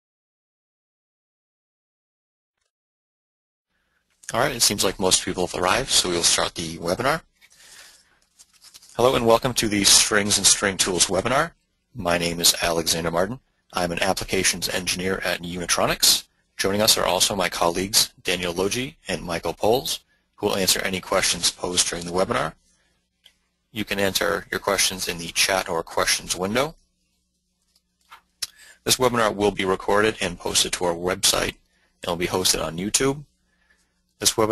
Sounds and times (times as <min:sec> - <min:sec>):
Speech: 0:04.2 - 0:07.3, 0:08.9 - 0:22.7, 0:23.7 - 0:26.8, 0:28.4 - 0:33.4, 0:34.2 - 0:34.5.